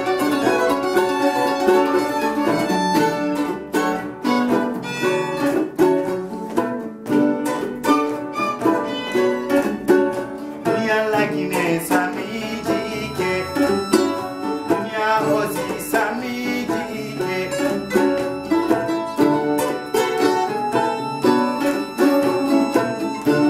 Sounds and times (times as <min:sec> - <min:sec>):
Violin, fiddle: 0:00.0 - 0:06.2, 0:07.1 - 0:23.5
Guitar: 0:00.0 - 0:23.5
Mandolin: 0:00.0 - 0:23.5.